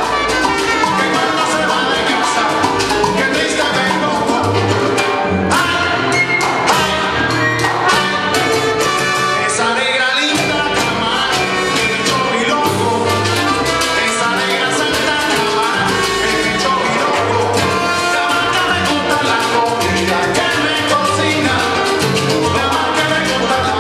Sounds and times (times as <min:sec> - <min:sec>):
Dance music: 0:00.0 - 0:23.8.